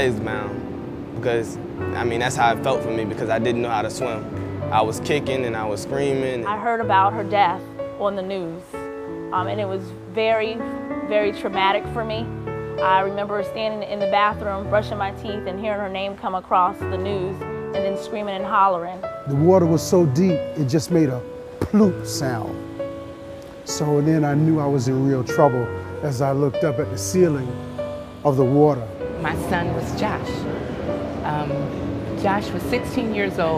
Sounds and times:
Music: 0:00.0 - 0:33.5.

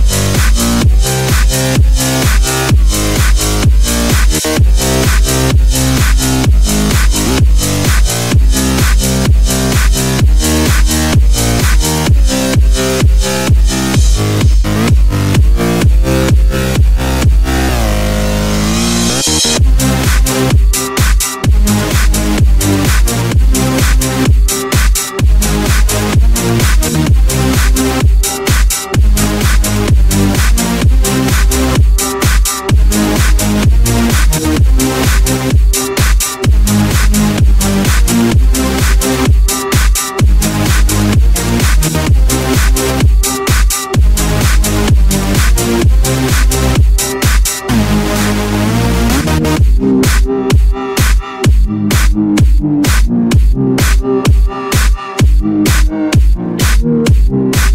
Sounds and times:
Disco: 0:00.0 - 0:57.7.

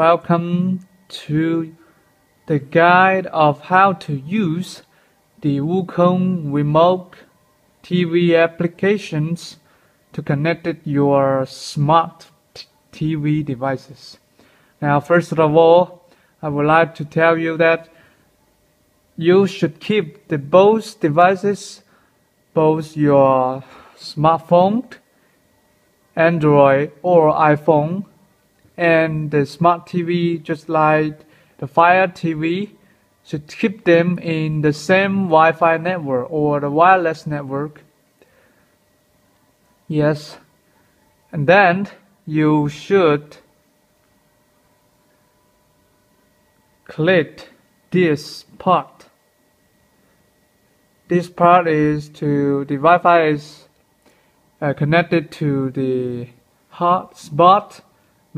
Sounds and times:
Speech: 0:00.0 - 0:01.8, 0:02.5 - 0:14.2, 0:14.8 - 0:18.0, 0:19.2 - 0:21.9, 0:22.5 - 0:25.1, 0:26.1 - 0:28.2, 0:28.8 - 0:37.9, 0:39.9 - 0:40.5, 0:41.2 - 0:43.5, 0:46.8 - 0:49.2, 0:51.1 - 0:53.8, 0:54.6 - 0:58.3.

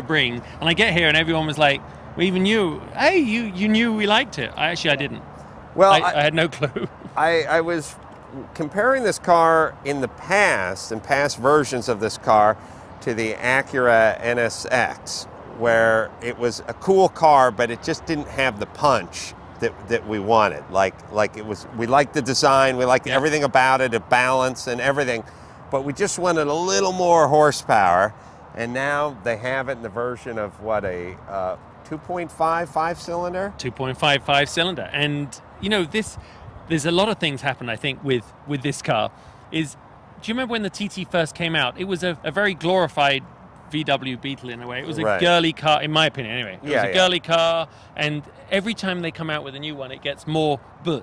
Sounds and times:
Speech: 0:00.0 - 0:05.2, 0:05.8 - 0:51.0.

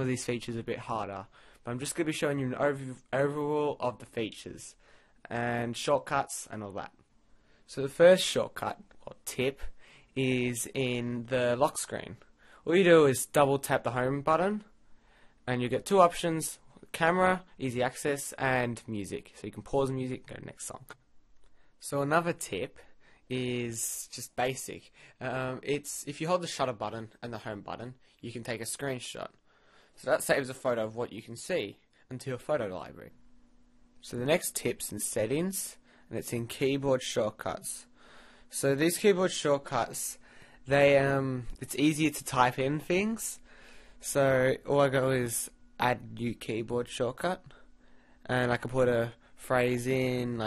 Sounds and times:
Speech: 0:00.0 - 0:07.0, 0:07.7 - 0:14.7, 0:15.5 - 0:21.0, 0:21.8 - 0:29.4, 0:30.0 - 0:33.2, 0:34.0 - 0:37.9, 0:38.5 - 0:43.4, 0:44.0 - 0:47.6, 0:48.2 - 0:50.4.

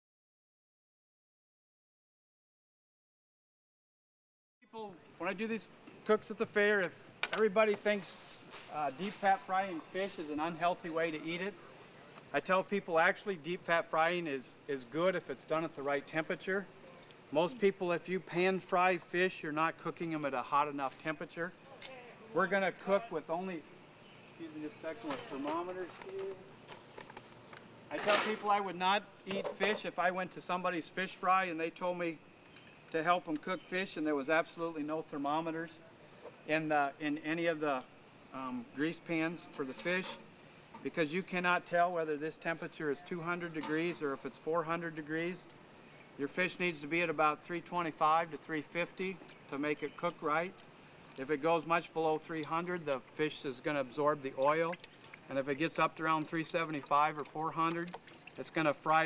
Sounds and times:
Speech: 0:04.7 - 0:11.6, 0:12.3 - 0:16.7, 0:17.4 - 0:23.7, 0:24.3 - 0:26.5, 0:27.9 - 0:32.2, 0:32.9 - 0:35.8, 0:36.5 - 0:40.2, 0:40.8 - 0:45.5, 0:46.2 - 0:50.6, 0:51.2 - 0:59.0.

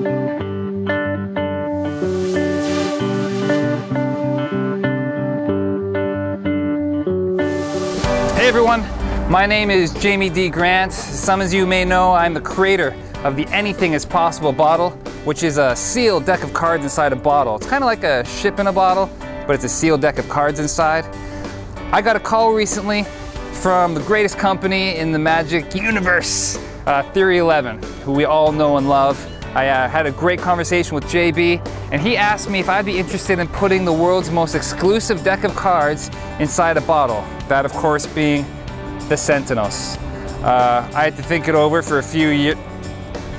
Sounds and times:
Music: 0:00.0 - 0:43.3
Speech: 0:08.4 - 0:21.1, 0:21.9 - 0:38.5, 0:39.1 - 0:42.6.

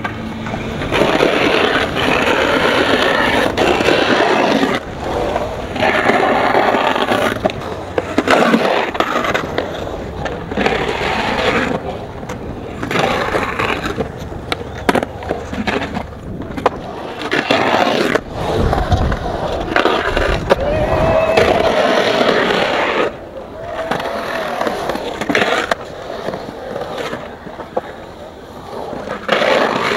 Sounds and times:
Skateboard: 0:00.0 - 0:29.9.

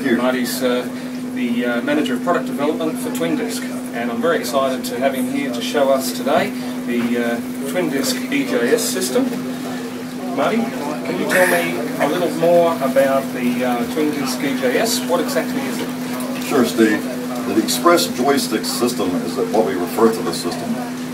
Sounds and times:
Speech: 0:00.0 - 0:21.1.

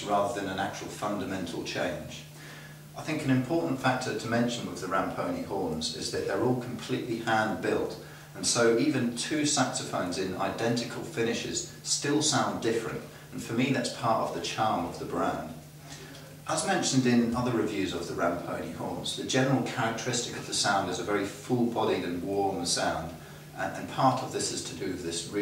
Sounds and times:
Speech: 0:00.0 - 0:02.3, 0:03.0 - 0:25.4.

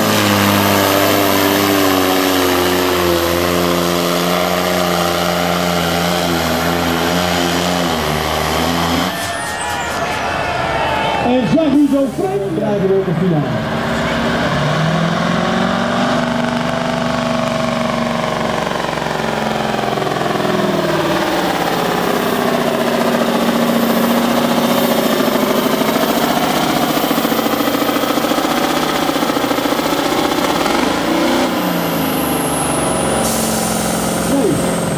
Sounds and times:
Truck: 0:00.0 - 0:34.9
Speech: 0:11.2 - 0:13.6, 0:34.3 - 0:34.7.

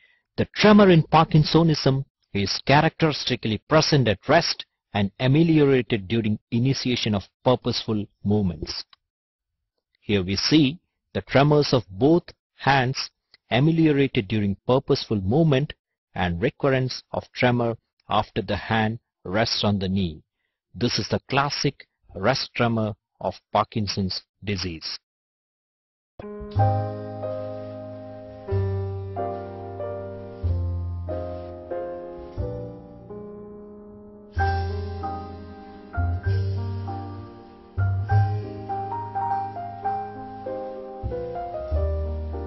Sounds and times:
Speech: 0:00.4 - 0:09.0, 0:10.1 - 0:20.2, 0:20.8 - 0:25.0.

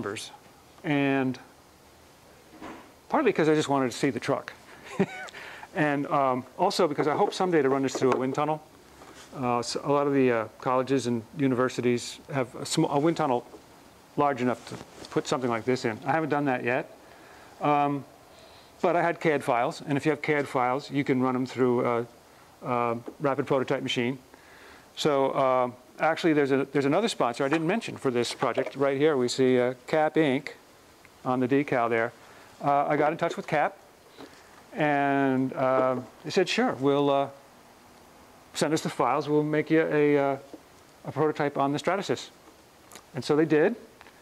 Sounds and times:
Speech: 0:00.0 - 0:01.5, 0:03.1 - 0:04.6, 0:05.8 - 0:08.7, 0:09.4 - 0:13.5, 0:14.2 - 0:16.9, 0:17.6 - 0:18.1, 0:18.8 - 0:24.2, 0:25.0 - 0:30.6, 0:31.2 - 0:33.8, 0:34.8 - 0:37.4, 0:38.6 - 0:40.5, 0:41.1 - 0:42.4, 0:43.1 - 0:43.9.

